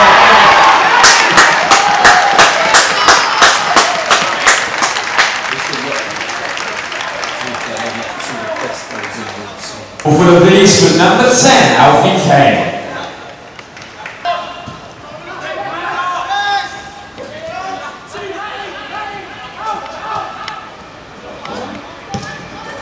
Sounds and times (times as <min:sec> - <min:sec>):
Male speech, man speaking: 0:05.5 - 0:06.2, 0:07.4 - 0:13.2, 0:14.2 - 0:20.3.